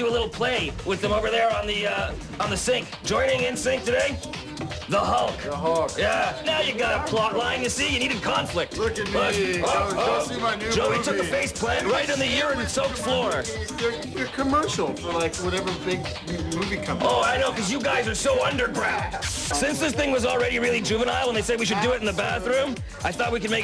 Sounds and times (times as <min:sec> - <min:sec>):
Speech: 0:00.0 - 0:04.2, 0:04.9 - 0:23.6
Background music: 0:00.0 - 0:23.6.